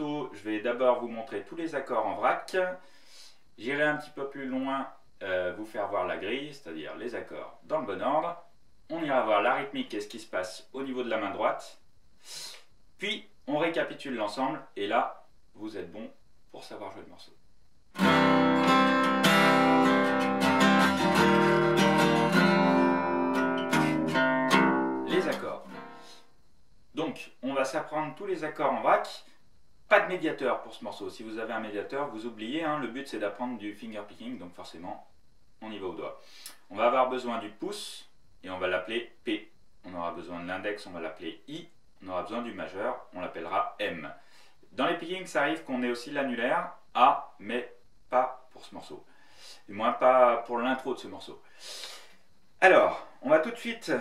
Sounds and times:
Speech: 0:00.0 - 0:02.8, 0:03.6 - 0:11.8, 0:13.0 - 0:17.4, 0:25.1 - 0:25.7, 0:26.9 - 0:44.2, 0:44.8 - 0:49.1, 0:49.7 - 0:51.4, 0:52.6 - 0:54.0.

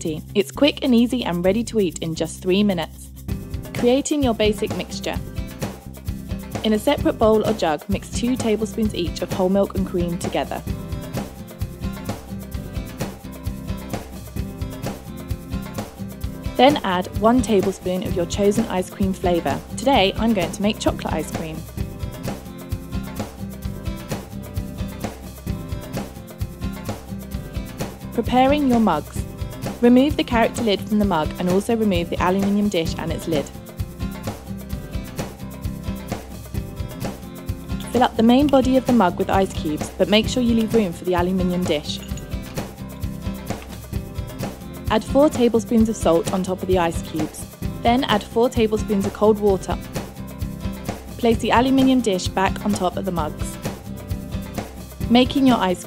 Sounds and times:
Speech: 0:00.0 - 0:03.1, 0:03.8 - 0:05.2, 0:06.6 - 0:10.6, 0:16.6 - 0:21.6, 0:28.2 - 0:29.2, 0:29.8 - 0:33.5, 0:37.8 - 0:42.0, 0:44.9 - 0:49.8, 0:51.2 - 0:53.6, 0:55.1 - 0:55.8
Music: 0:00.0 - 0:55.8.

